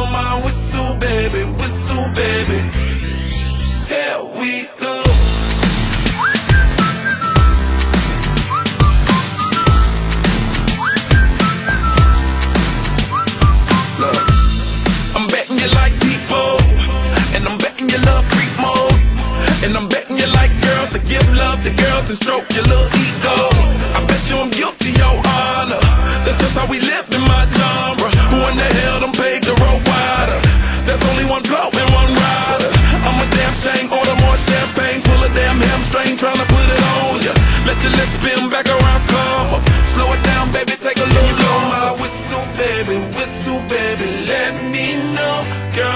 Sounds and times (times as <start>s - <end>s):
Dubstep: 5.1s - 43.0s.